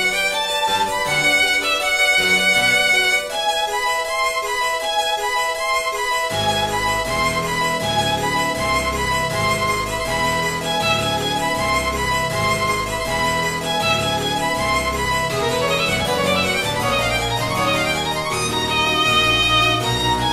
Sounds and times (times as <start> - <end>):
Violin, fiddle: 0.0 - 20.3.